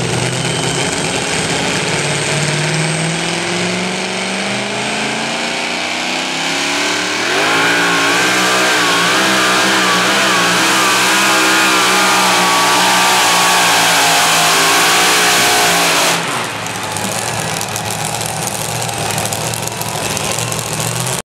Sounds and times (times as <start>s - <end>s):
Vehicle: 0.0s - 21.2s.